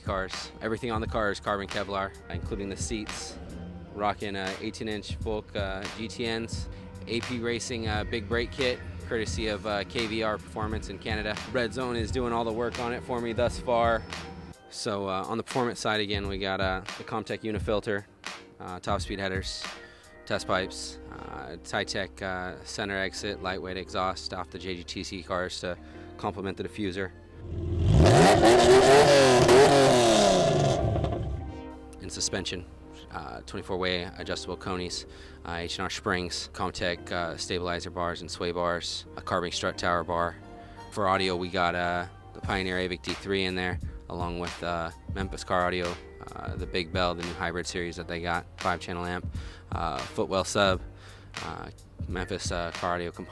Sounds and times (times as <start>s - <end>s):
Speech: 0.0s - 3.4s, 4.0s - 14.0s, 14.7s - 19.7s, 20.3s - 27.1s, 32.0s - 50.8s, 51.4s - 53.3s
Music: 0.0s - 53.3s.